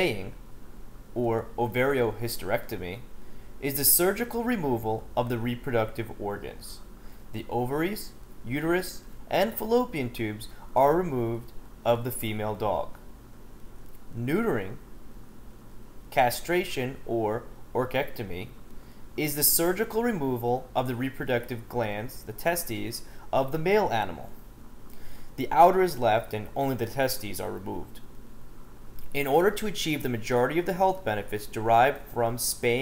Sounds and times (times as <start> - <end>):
Speech: 0.0 - 0.4, 1.2 - 13.0, 14.1 - 14.8, 16.1 - 18.6, 19.2 - 24.4, 25.4 - 28.0, 29.1 - 32.8.